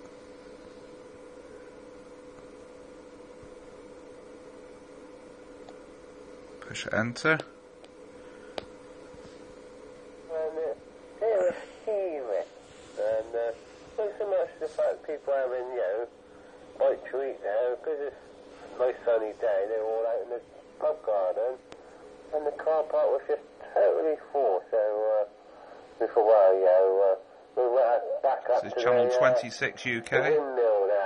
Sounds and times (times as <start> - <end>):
Speech: 6.6 - 7.5, 10.3 - 16.1, 16.8 - 21.6, 22.3 - 25.3, 26.0 - 31.0.